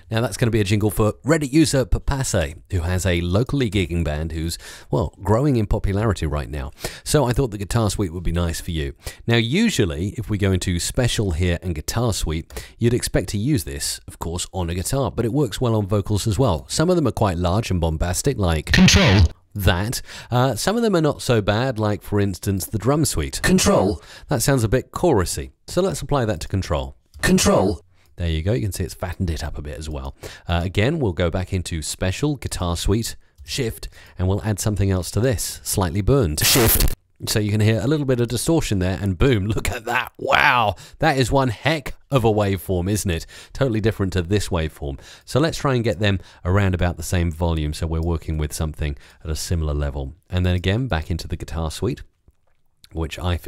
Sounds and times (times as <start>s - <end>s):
Speech: 0.0s - 52.1s, 52.9s - 53.4s.